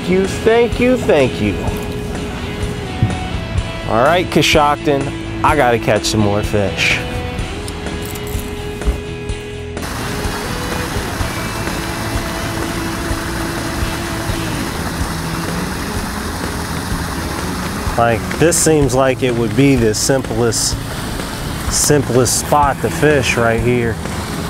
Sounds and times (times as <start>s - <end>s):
Speech: 0.0s - 1.8s, 3.9s - 7.1s, 18.0s - 20.8s, 21.7s - 24.0s
Music: 0.0s - 24.5s
Outside, rural or natural: 0.0s - 24.5s.